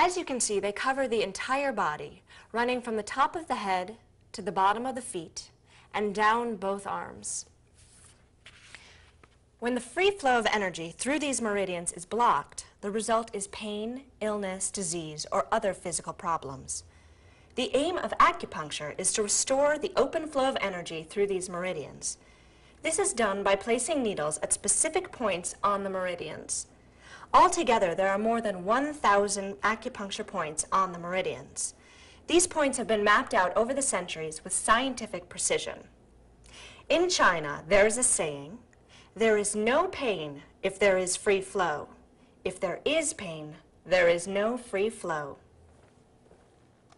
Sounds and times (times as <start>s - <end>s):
Speech: 0.0s - 7.5s, 9.6s - 16.8s, 17.6s - 22.2s, 22.8s - 26.7s, 27.3s - 35.9s, 36.9s - 38.6s, 39.2s - 45.4s.